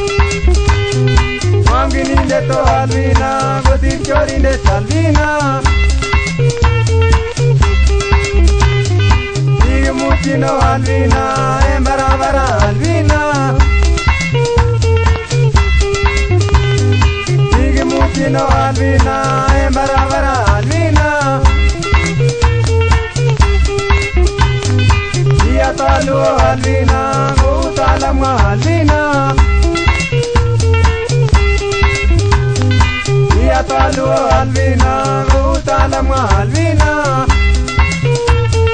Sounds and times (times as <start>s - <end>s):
Music: 0.0s - 38.7s.